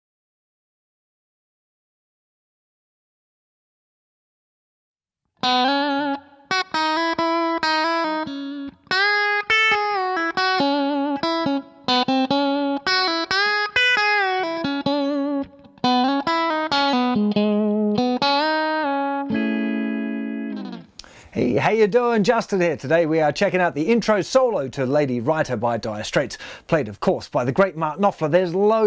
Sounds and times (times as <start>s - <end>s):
Guitar: 5.4s - 23.5s.